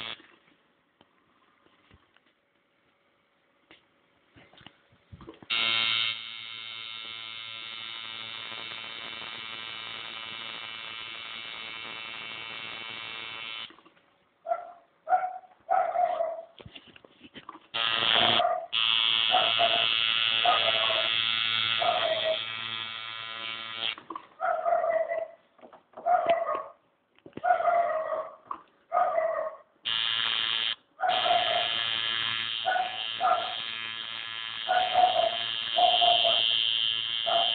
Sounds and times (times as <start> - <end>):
Canidae, dogs, wolves: 14.4 - 16.6, 18.2 - 21.2, 21.8 - 22.4, 24.4 - 29.7, 31.0 - 31.8, 32.7 - 33.6, 34.7 - 36.5, 37.3 - 37.5
Bark: 14.5 - 16.6, 18.2 - 21.2, 21.8 - 22.4, 24.4 - 25.4, 26.0 - 26.8, 27.4 - 29.7, 31.0 - 31.8, 32.6 - 33.7, 34.7 - 36.6, 37.3 - 37.5
Bow-wow: 14.5 - 16.6, 18.2 - 21.2, 21.8 - 22.4, 24.4 - 25.4, 26.0 - 26.8, 27.4 - 29.7, 31.0 - 31.8, 32.6 - 33.7, 34.7 - 36.6, 37.2 - 37.5.